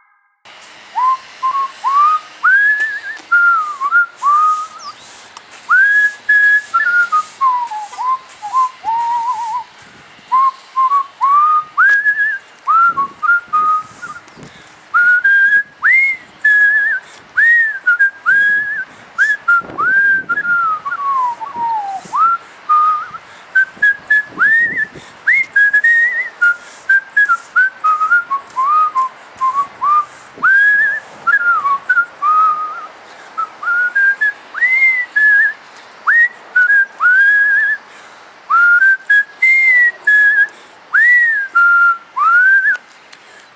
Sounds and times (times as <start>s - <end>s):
Whistling: 1.0s - 5.1s, 5.7s - 9.7s, 10.3s - 14.4s, 15.0s - 37.8s, 38.5s - 42.8s.